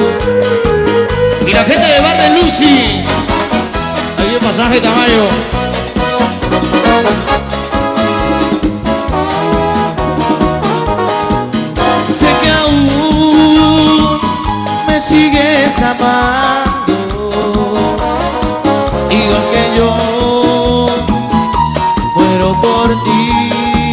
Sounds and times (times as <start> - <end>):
Music: 0.0 - 23.9.